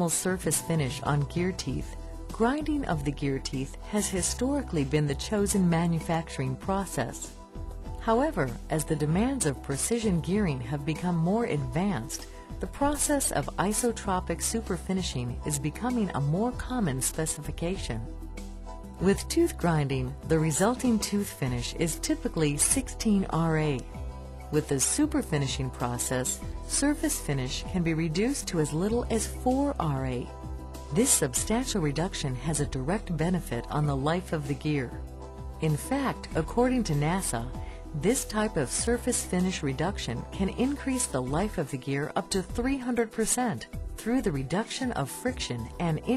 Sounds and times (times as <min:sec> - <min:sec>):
Speech: 0:00.0 - 0:07.3, 0:08.0 - 0:18.1, 0:19.0 - 0:23.9, 0:24.6 - 0:30.3, 0:30.9 - 0:35.0, 0:35.6 - 0:46.1
Music: 0:00.0 - 0:46.1.